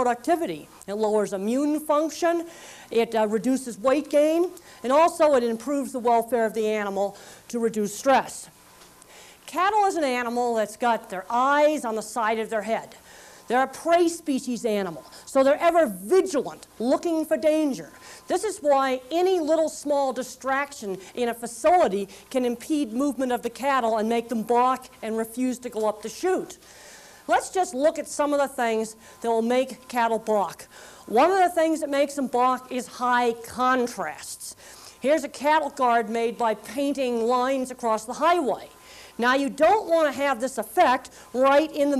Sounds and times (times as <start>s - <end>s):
Speech: 0.0s - 8.5s, 9.5s - 26.6s, 27.3s - 41.9s.